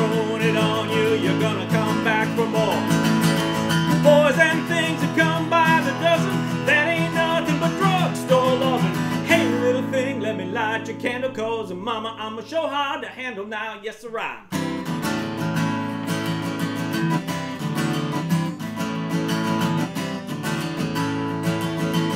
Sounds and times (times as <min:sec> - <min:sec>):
Acoustic guitar: 0:00.0 - 0:22.1.